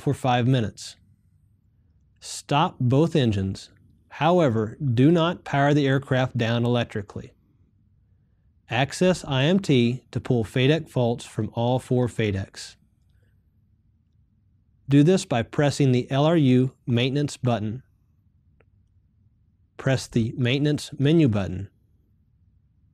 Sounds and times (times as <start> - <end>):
Speech: 0.0 - 1.0, 2.2 - 7.4, 8.7 - 12.8, 14.9 - 17.9, 19.8 - 21.8.